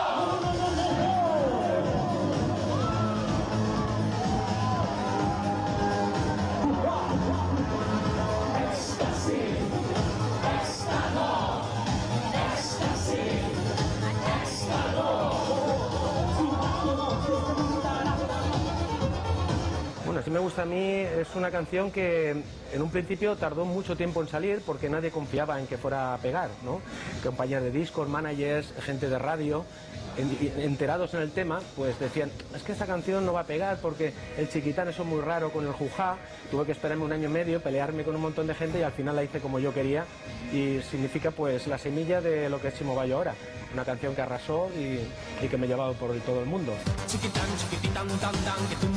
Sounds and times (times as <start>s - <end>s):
Techno: 0.0s - 48.9s.